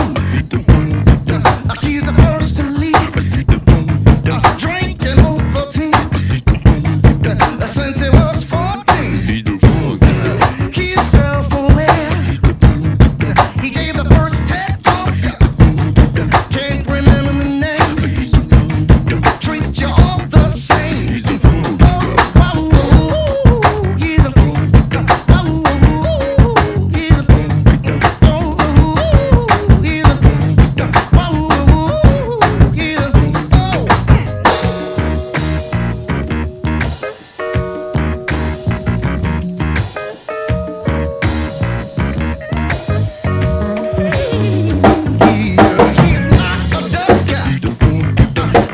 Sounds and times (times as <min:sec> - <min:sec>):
Drum: 0:00.0 - 0:48.7
Drum kit: 0:00.0 - 0:48.7.